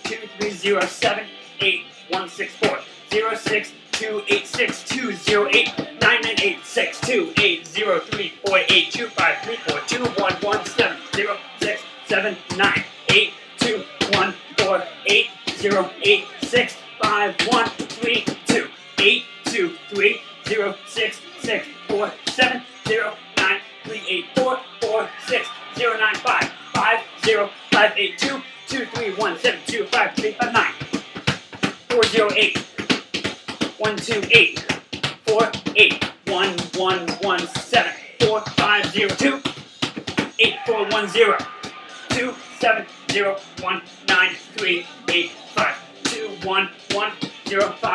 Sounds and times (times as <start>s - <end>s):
Speech: 0.0s - 30.9s, 31.9s - 32.7s, 33.8s - 34.7s, 35.3s - 39.5s, 40.4s - 47.9s.